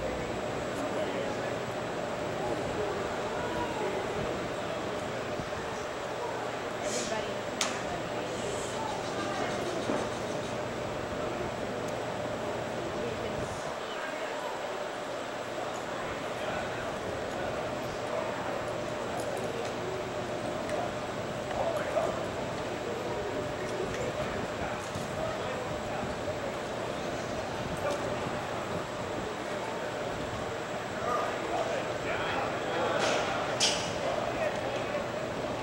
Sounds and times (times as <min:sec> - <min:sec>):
Speech: 0:00.0 - 0:35.6.